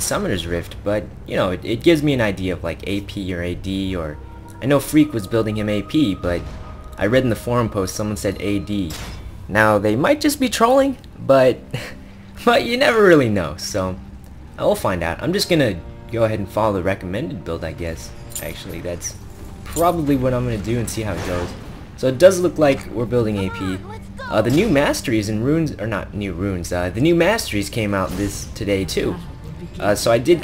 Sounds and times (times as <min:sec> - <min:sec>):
Music: 0:00.0 - 0:30.4
Speech: 0:19.8 - 0:30.4.